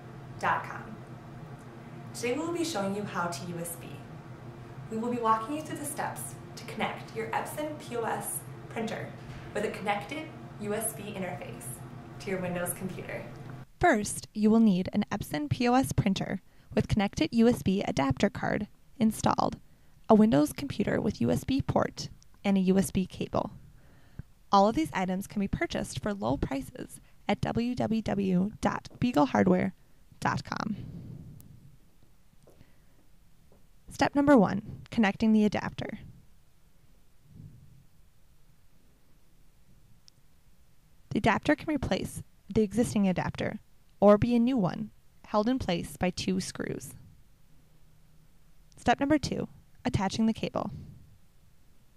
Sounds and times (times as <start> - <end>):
Speech: 0.4 - 1.0, 2.2 - 4.1, 4.9 - 23.6, 24.6 - 30.8, 33.9 - 36.1, 41.1 - 47.0, 48.8 - 50.8.